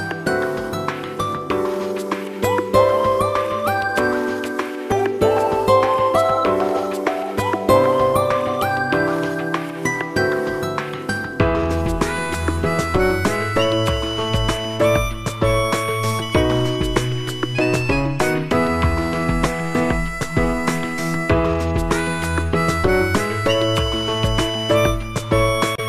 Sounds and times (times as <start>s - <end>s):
Music: 0.0s - 25.8s.